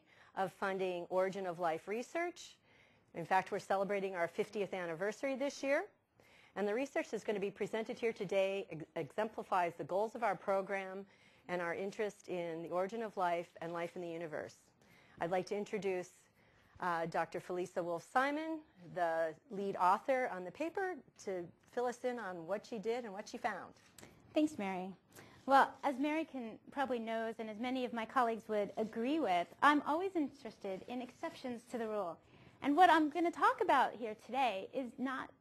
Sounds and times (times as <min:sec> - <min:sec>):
Speech: 0:00.4 - 0:02.6, 0:03.2 - 0:05.9, 0:06.6 - 0:35.4.